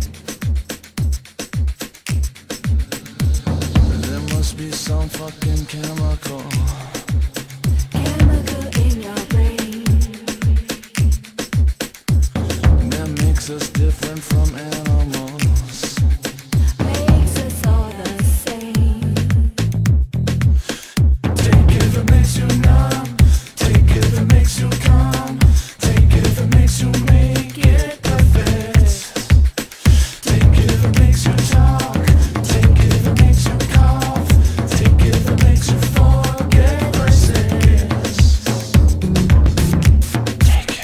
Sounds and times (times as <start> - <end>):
Music: 0.0 - 40.8.